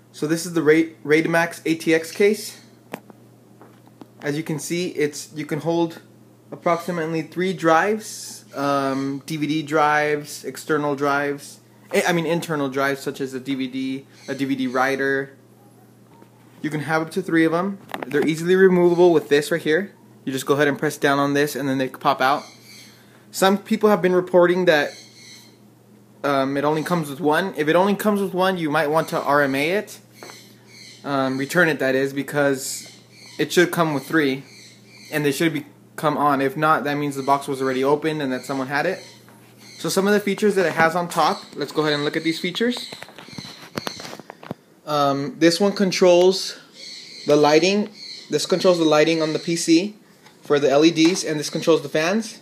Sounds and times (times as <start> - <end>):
Speech: 0.2 - 2.7, 4.2 - 15.4, 16.6 - 22.5, 23.3 - 25.0, 26.2 - 30.0, 31.0 - 34.5, 35.1 - 39.1, 39.8 - 42.9, 44.9 - 46.7, 47.3 - 52.4.